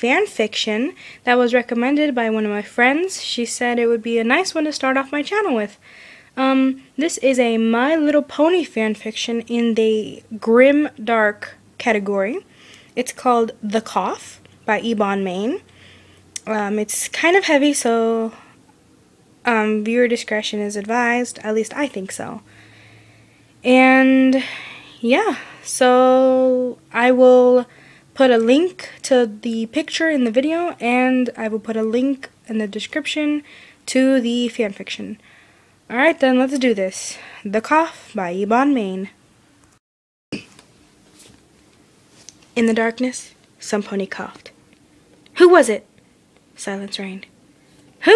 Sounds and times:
Speech: 0:00.0 - 0:05.8, 0:06.4 - 0:15.6, 0:16.4 - 0:18.4, 0:19.4 - 0:22.4, 0:23.6 - 0:35.2, 0:35.9 - 0:39.2, 0:42.6 - 0:44.6, 0:45.3 - 0:45.9, 0:46.6 - 0:47.3.

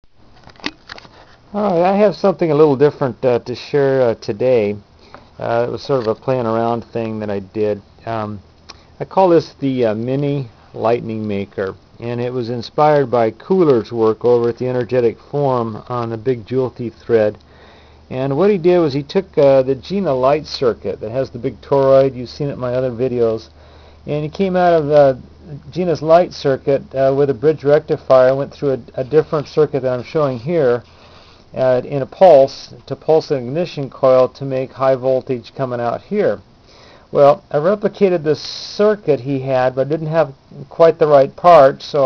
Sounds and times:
Inside, small room: 0:00.0 - 0:42.0
Speech: 0:01.5 - 0:04.8, 0:05.4 - 0:08.4, 0:09.0 - 0:17.4, 0:18.1 - 0:23.5, 0:24.1 - 0:30.9, 0:31.6 - 0:36.4, 0:37.1 - 0:42.0.

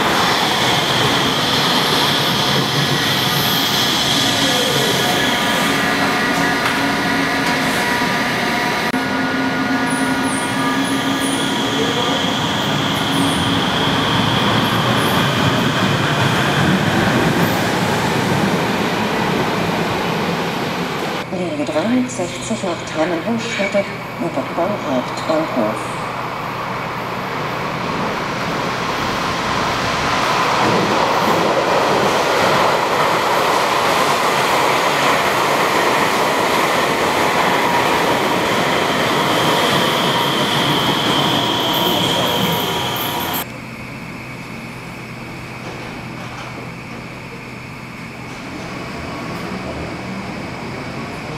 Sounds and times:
Subway, metro, underground: 0:00.0 - 0:51.3
Train: 0:00.0 - 0:51.3.

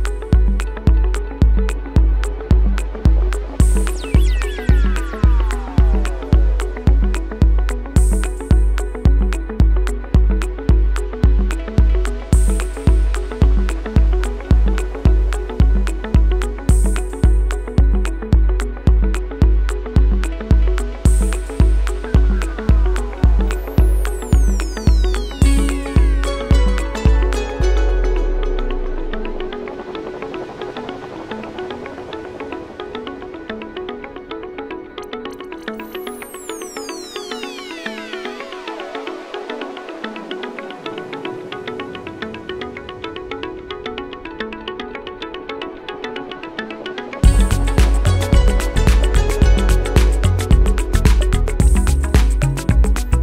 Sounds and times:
Pizzicato: 0:00.0 - 0:53.2
Zither: 0:00.0 - 0:53.2.

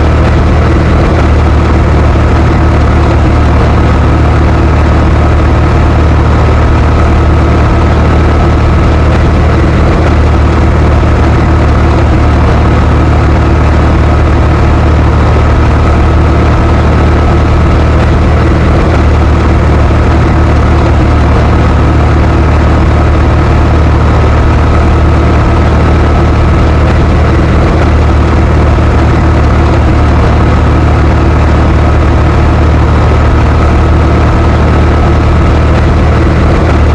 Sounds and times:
Heavy engine (low frequency): 0:00.0 - 0:36.9
Vehicle: 0:00.0 - 0:36.9.

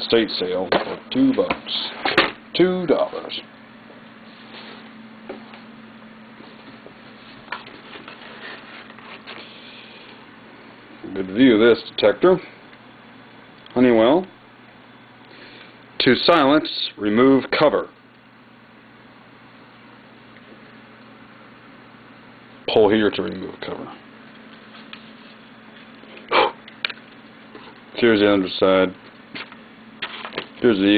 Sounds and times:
Speech: 0:00.0 - 0:03.5, 0:11.0 - 0:12.5, 0:13.7 - 0:14.4, 0:16.0 - 0:18.0, 0:22.7 - 0:24.0, 0:28.0 - 0:29.0, 0:30.6 - 0:30.9.

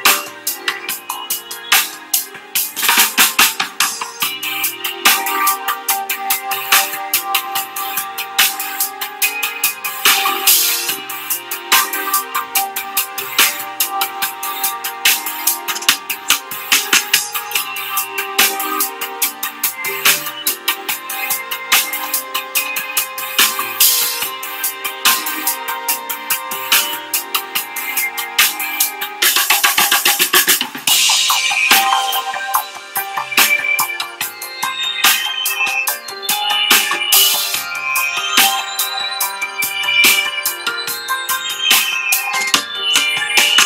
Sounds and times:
Music: 0:00.0 - 0:43.6.

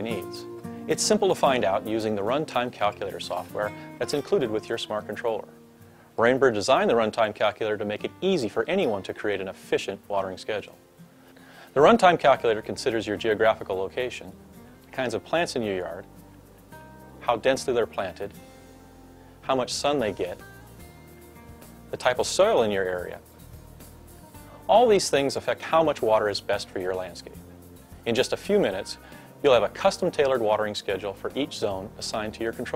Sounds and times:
Speech: 0:00.0 - 0:05.5, 0:06.2 - 0:10.8, 0:11.8 - 0:16.1, 0:17.2 - 0:18.4, 0:19.4 - 0:20.4, 0:21.9 - 0:23.2, 0:24.7 - 0:27.4, 0:28.1 - 0:32.7
Music: 0:00.0 - 0:32.7.

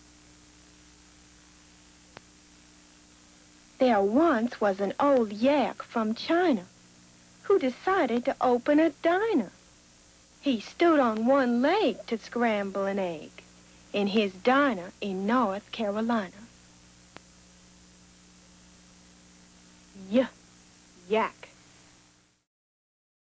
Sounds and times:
Speech: 0:03.8 - 0:06.7, 0:07.5 - 0:09.6, 0:10.4 - 0:16.5, 0:20.0 - 0:20.4, 0:21.0 - 0:21.5.

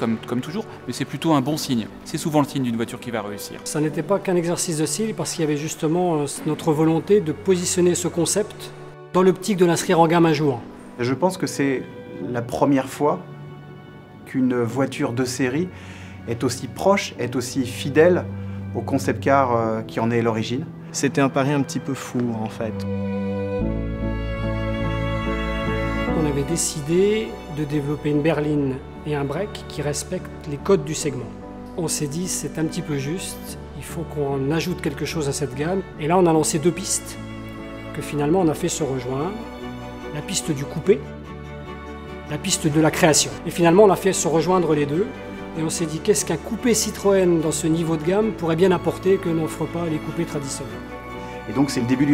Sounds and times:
Speech: 0:00.0 - 0:13.2, 0:14.3 - 0:15.7, 0:16.3 - 0:22.8, 0:26.1 - 0:37.2, 0:37.9 - 0:39.4, 0:40.1 - 0:41.0, 0:42.3 - 0:50.8, 0:51.5 - 0:52.1
Music: 0:00.0 - 0:52.1.

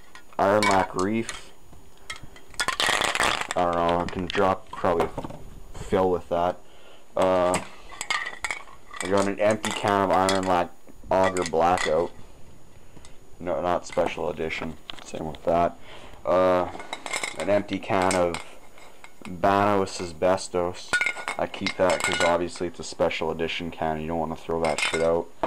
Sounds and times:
Speech: 0:00.4 - 0:01.5, 0:03.6 - 0:05.2, 0:05.8 - 0:06.6, 0:07.2 - 0:07.7, 0:09.0 - 0:12.2, 0:13.4 - 0:16.8, 0:17.4 - 0:18.5, 0:19.3 - 0:25.3.

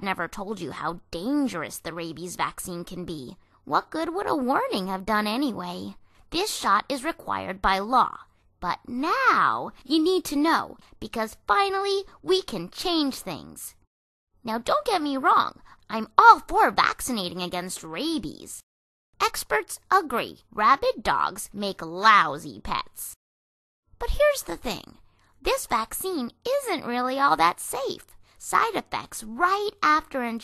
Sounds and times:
Speech: 0:00.0 - 0:13.8, 0:14.4 - 0:18.6, 0:19.2 - 0:23.2, 0:24.0 - 0:30.4.

